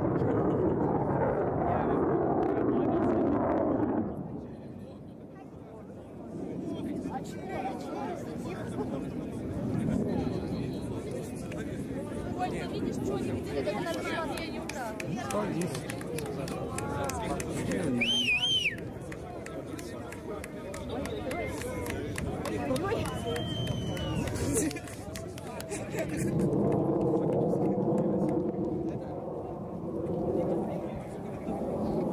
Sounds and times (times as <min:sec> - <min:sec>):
Speech: 0:04.0 - 0:26.4, 0:27.1 - 0:32.1.